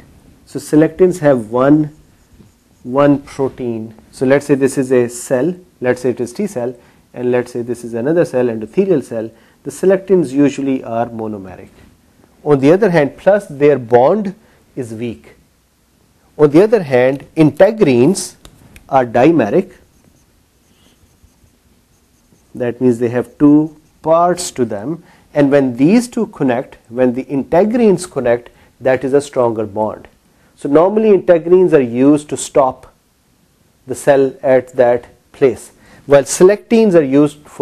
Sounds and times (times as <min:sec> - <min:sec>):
Speech: 0:00.5 - 0:02.0, 0:02.8 - 0:11.8, 0:12.4 - 0:15.4, 0:16.4 - 0:19.8, 0:22.6 - 0:33.0, 0:33.9 - 0:37.6.